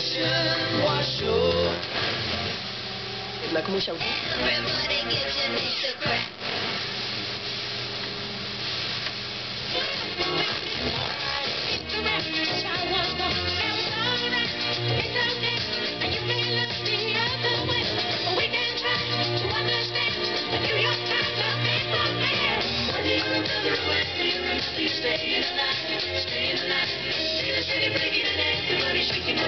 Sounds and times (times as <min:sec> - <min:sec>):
Music: 0:00.0 - 0:29.4.